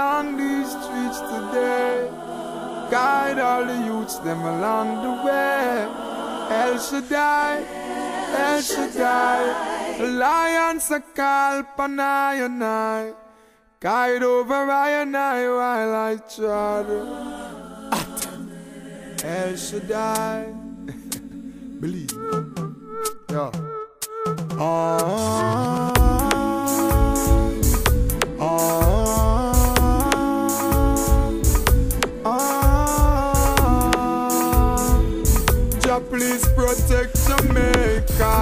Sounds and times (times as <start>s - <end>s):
Music: 0.0s - 10.0s, 16.7s - 38.4s.